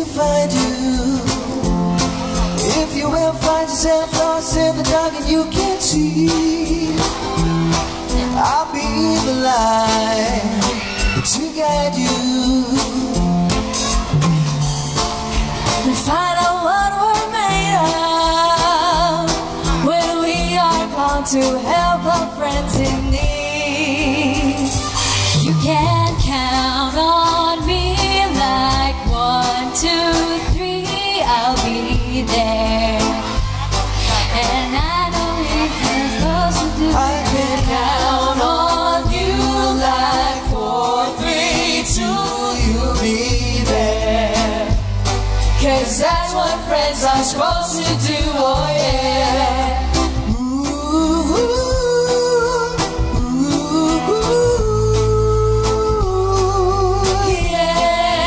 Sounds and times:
Music: 0.0s - 58.2s
Singing: 34.1s - 44.8s, 45.6s - 58.2s.

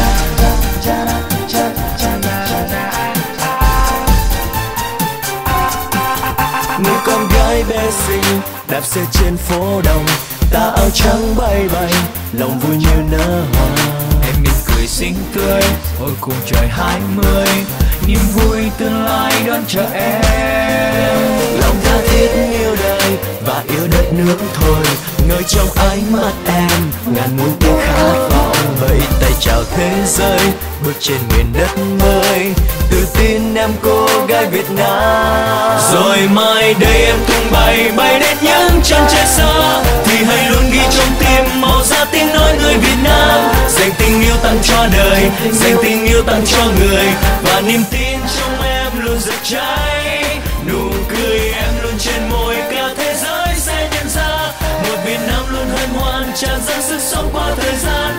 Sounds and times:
Independent music: 0.0s - 58.1s.

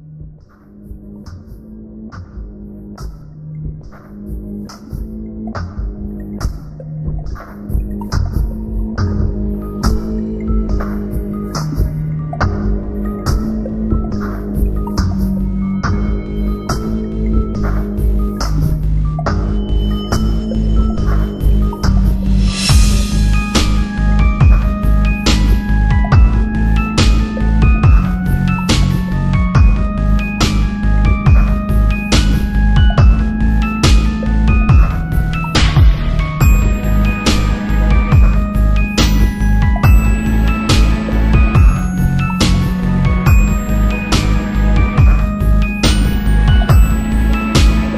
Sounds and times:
Soundtrack music: 0.1s - 47.9s.

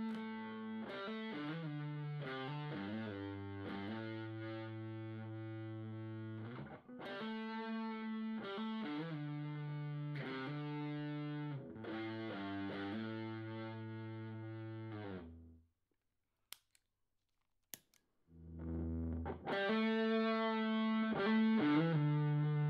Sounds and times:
Music: 0.0s - 15.6s, 18.4s - 22.6s.

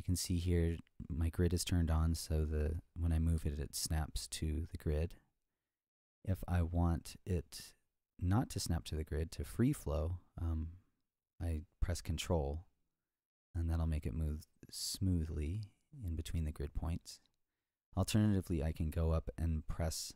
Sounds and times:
Speech: 0.0s - 5.2s, 6.3s - 10.8s, 11.4s - 12.7s, 13.6s - 17.3s, 18.0s - 20.1s.

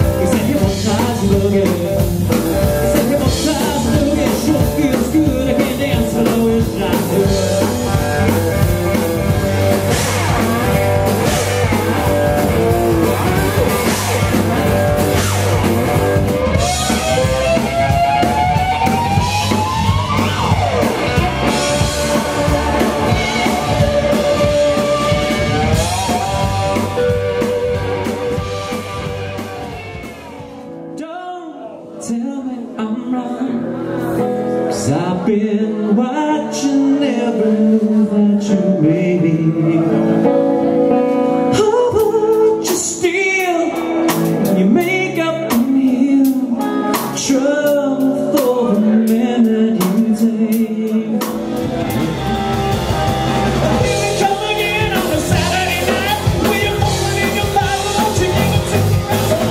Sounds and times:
Male singing: 0.0s - 8.0s, 31.0s - 40.4s, 41.4s - 51.6s, 53.6s - 59.5s
Music: 0.0s - 59.5s.

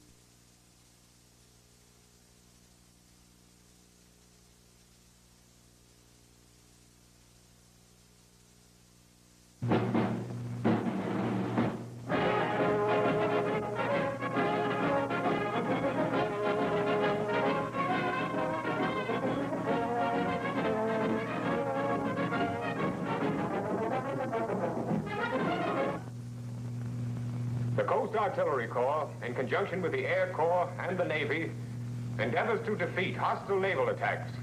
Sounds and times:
Music: 9.6s - 26.2s
Speech: 27.8s - 31.6s, 32.2s - 34.4s.

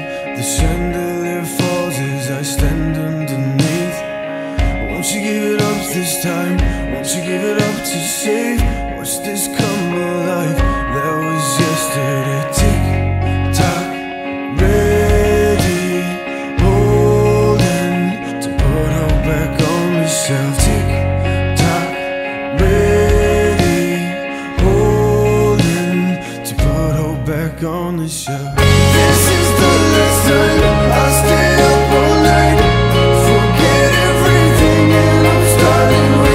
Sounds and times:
Music: 0.0s - 36.3s.

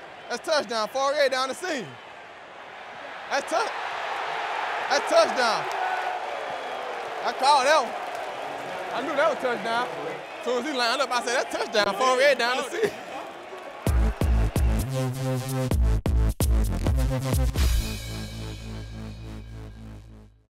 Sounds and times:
Speech: 0.3s - 2.0s, 3.3s - 3.7s, 4.9s - 5.7s, 7.2s - 7.9s, 8.9s - 13.0s
Music: 13.9s - 20.5s.

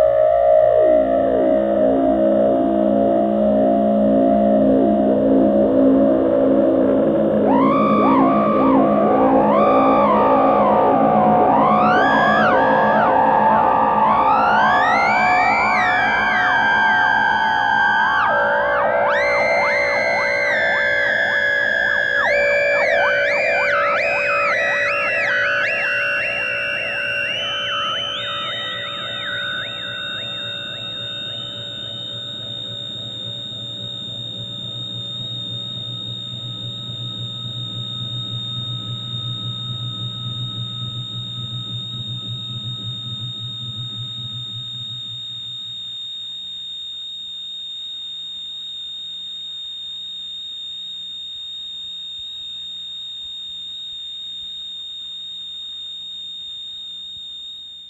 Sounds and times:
Music: 0.0s - 45.2s.

